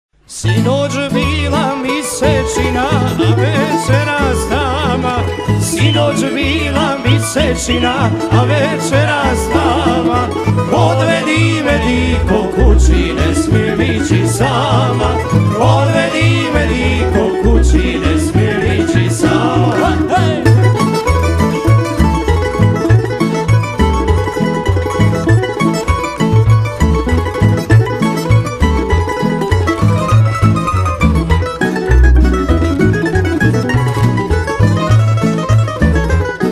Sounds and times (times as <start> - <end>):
Guitar: 0.2 - 36.5.